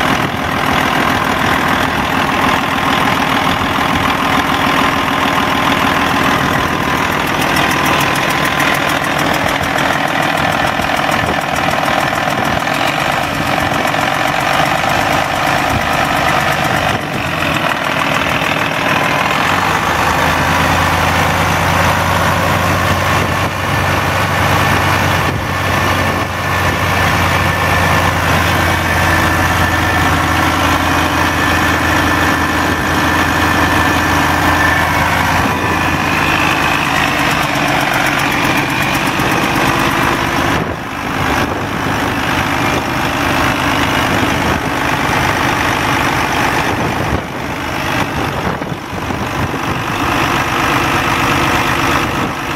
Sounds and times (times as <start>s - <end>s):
Engine: 0.0s - 52.5s.